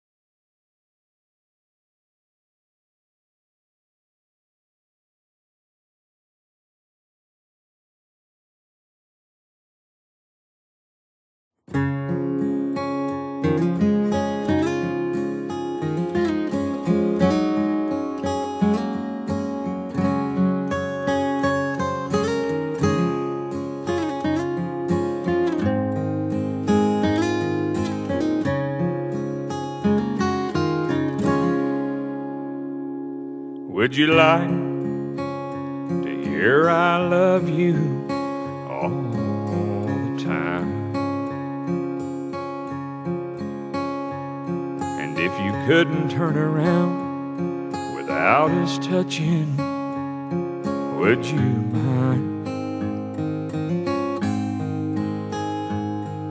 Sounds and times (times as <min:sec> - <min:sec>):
Acoustic guitar: 0:11.7 - 0:56.3.